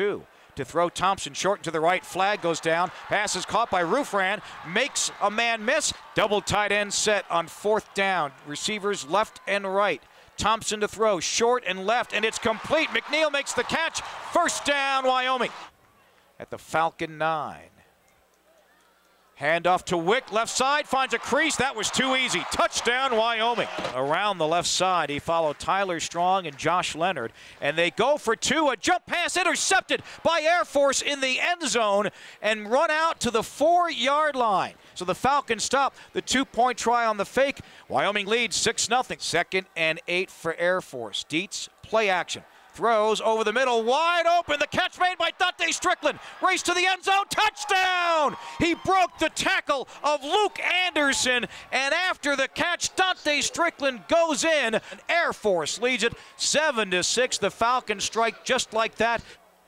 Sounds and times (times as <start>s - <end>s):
Speech: 0.0s - 15.6s, 16.4s - 17.8s, 19.4s - 59.2s.